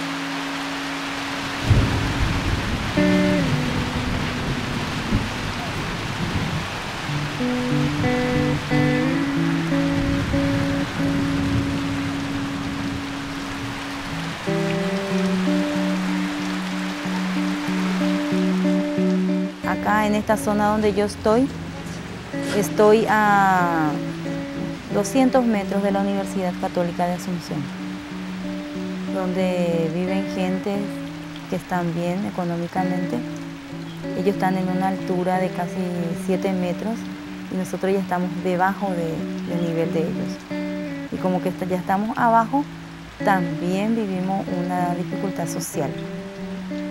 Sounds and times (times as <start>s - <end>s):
Music: 0.0s - 46.9s
Rain: 0.0s - 46.9s
Speech: 19.6s - 21.5s, 22.5s - 24.0s, 24.9s - 27.7s, 29.1s - 30.9s, 31.5s - 33.3s, 34.2s - 40.4s, 41.2s - 46.0s.